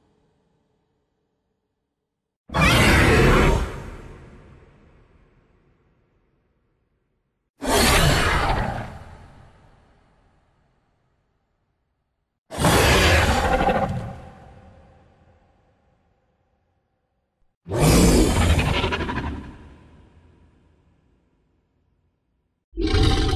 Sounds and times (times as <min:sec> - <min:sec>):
Sound effect: 0:02.5 - 0:06.5, 0:07.6 - 0:11.0, 0:12.5 - 0:16.7, 0:17.7 - 0:21.9.